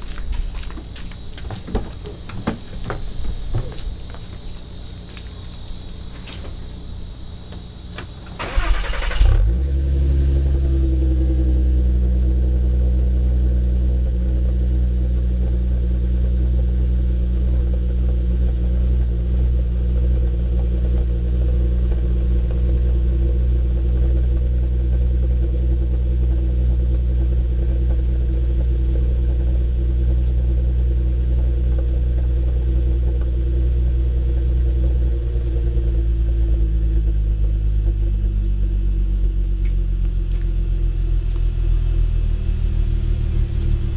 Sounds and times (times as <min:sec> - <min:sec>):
Car: 0:00.0 - 0:43.9.